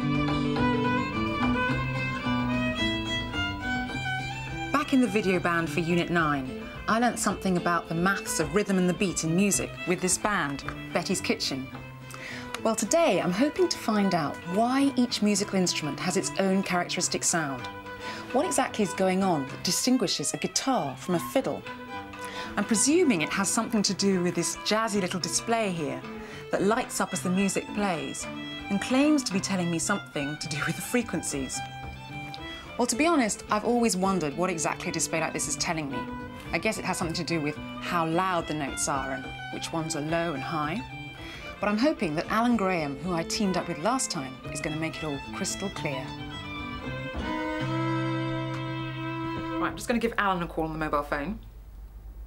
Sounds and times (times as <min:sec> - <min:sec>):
Music: 0:00.0 - 0:51.5
Speech: 0:04.7 - 0:11.7, 0:12.6 - 0:17.7, 0:18.4 - 0:21.6, 0:22.6 - 0:31.7, 0:32.8 - 0:40.8, 0:41.6 - 0:46.1, 0:49.6 - 0:51.4.